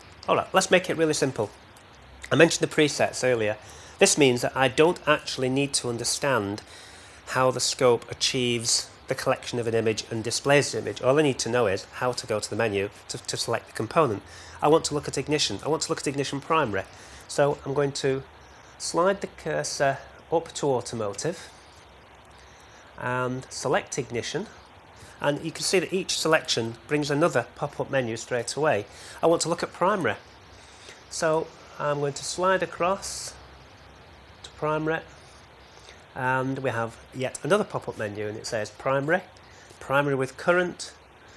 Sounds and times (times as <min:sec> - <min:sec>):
Speech: 0:00.3 - 0:01.6, 0:02.3 - 0:06.6, 0:07.3 - 0:21.5, 0:23.0 - 0:24.6, 0:25.2 - 0:30.2, 0:31.1 - 0:33.4, 0:34.4 - 0:35.1, 0:36.2 - 0:41.0.